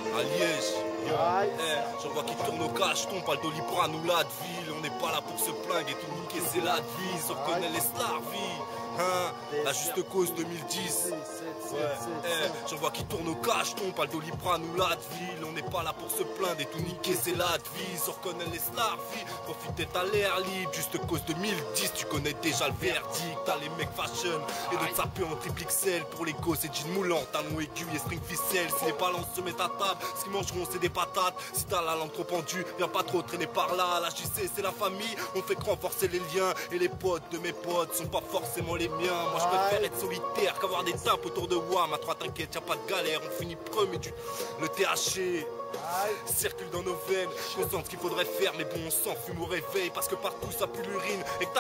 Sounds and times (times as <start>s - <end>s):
Music: 0.0s - 51.6s.